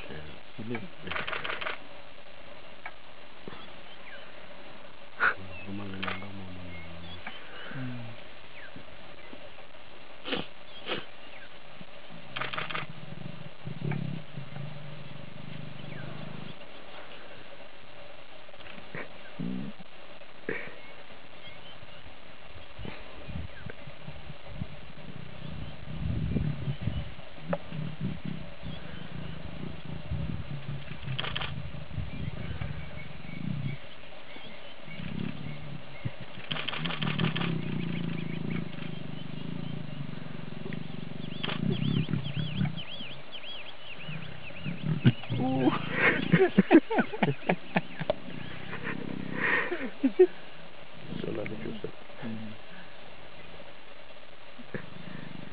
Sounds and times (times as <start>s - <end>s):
Male speech, man speaking: 0.0s - 1.2s, 5.4s - 7.2s, 51.1s - 52.6s
Roaring cats (lions, tigers): 0.0s - 1.8s, 5.2s - 8.8s, 11.8s - 17.6s, 18.5s - 20.0s, 22.6s - 50.0s, 51.0s - 53.0s, 54.6s - 55.5s.